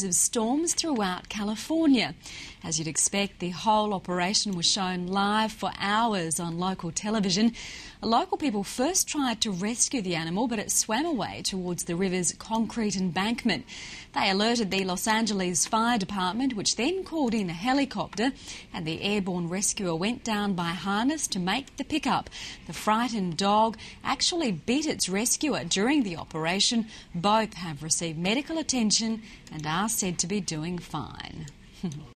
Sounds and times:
Speech: 0.0 - 13.6, 14.2 - 32.1.

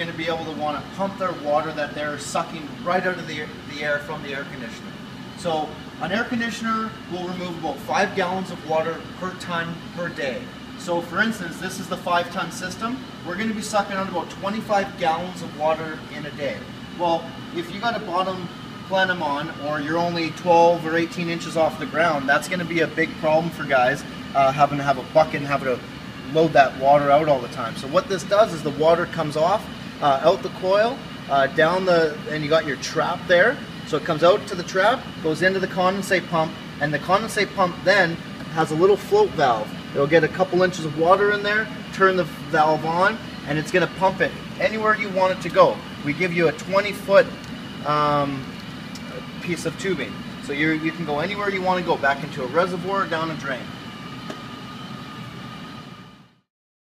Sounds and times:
Speech: 0.0 - 53.8.

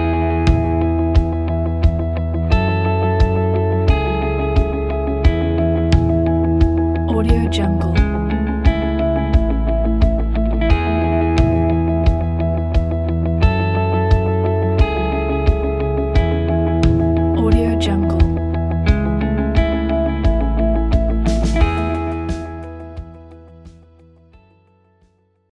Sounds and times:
Music: 0.0 - 25.5
Speech: 7.1 - 8.3, 17.4 - 18.4.

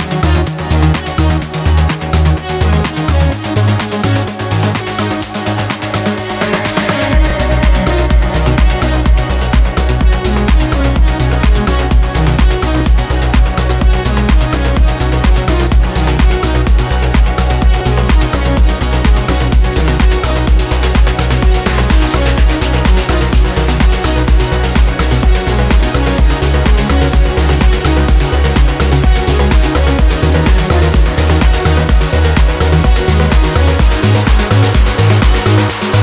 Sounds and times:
Trance music: 0.0 - 36.0.

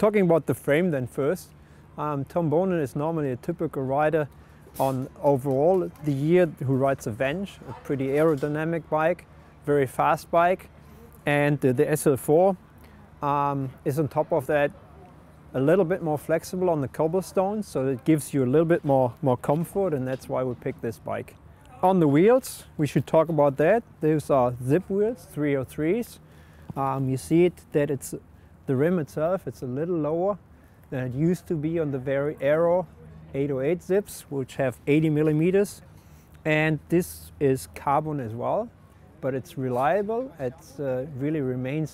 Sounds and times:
Speech: 0.0 - 12.6, 13.2 - 41.9.

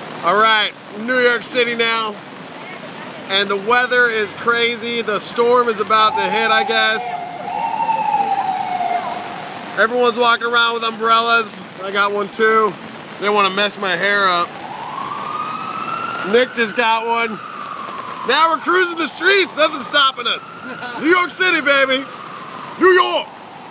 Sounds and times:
Rain on surface: 0.0 - 23.7
Speech: 0.2 - 7.2, 9.8 - 14.5, 22.8 - 23.3.

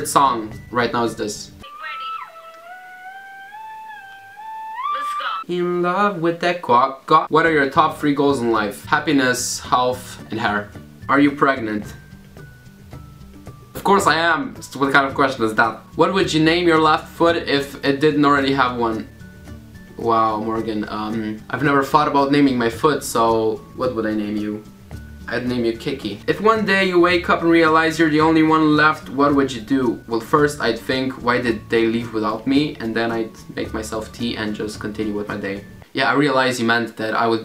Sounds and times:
Speech: 0.0 - 2.4, 5.0 - 12.0, 13.8 - 19.1, 20.0 - 24.6, 25.3 - 37.4
Music: 0.0 - 5.7, 7.2 - 37.4
Inside, small room: 0.0 - 37.4.

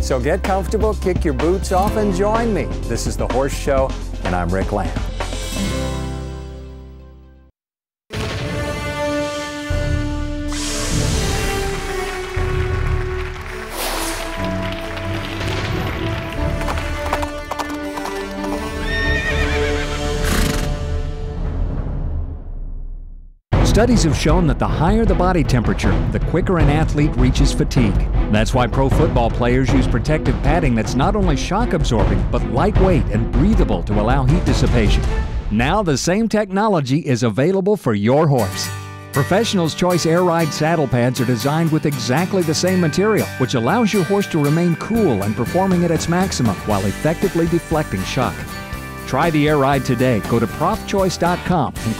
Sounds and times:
Music: 0.0 - 36.4, 38.1 - 51.9
Clip-clop: 16.3 - 19.0
Neigh, whinny: 18.6 - 20.7.

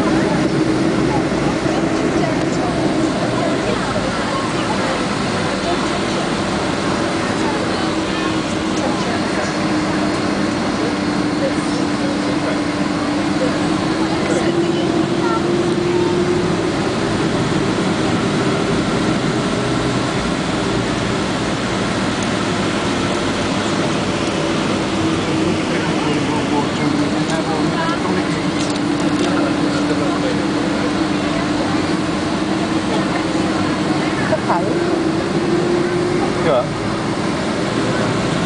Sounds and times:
Speech: 0.0 - 16.2, 25.4 - 32.1, 32.8 - 35.0
Fixed-wing aircraft, airplane: 0.0 - 38.4
Outside, urban or manmade: 0.0 - 38.4.

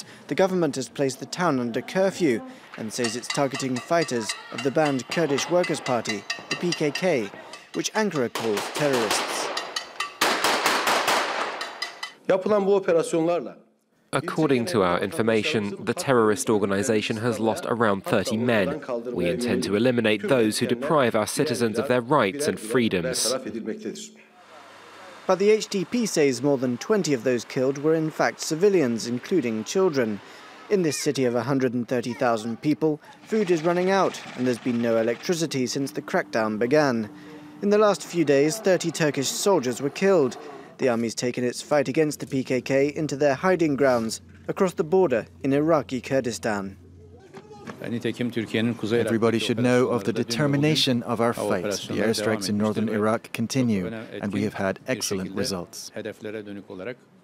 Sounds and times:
Speech: 0.3 - 9.4, 14.2 - 24.2, 25.2 - 57.0.

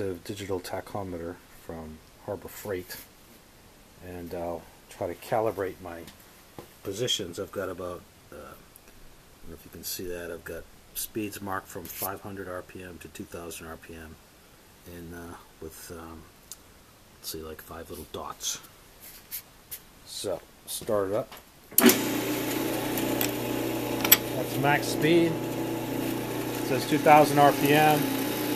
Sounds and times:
Speech: 0.0 - 3.1, 4.0 - 6.2, 6.8 - 8.7, 9.4 - 14.2, 14.8 - 16.3, 17.2 - 18.7, 20.0 - 21.4, 24.4 - 25.4, 26.7 - 28.1.

